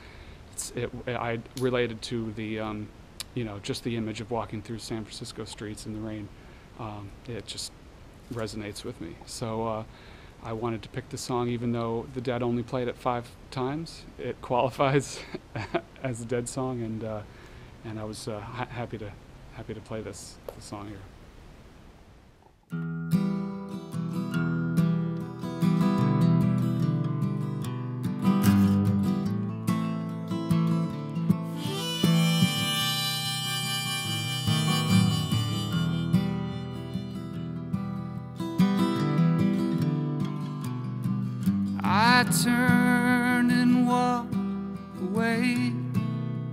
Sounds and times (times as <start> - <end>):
Speech: 0.6 - 15.3, 16.0 - 21.1
Music: 22.7 - 46.5.